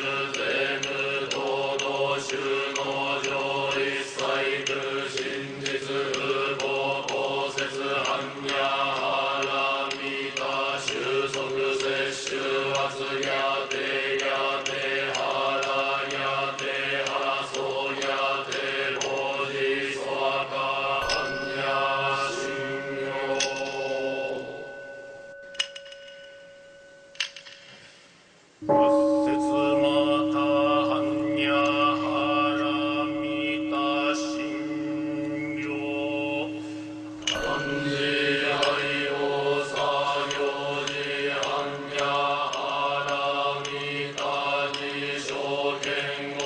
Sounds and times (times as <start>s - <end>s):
Mantra: 0.0s - 25.0s, 28.6s - 46.4s.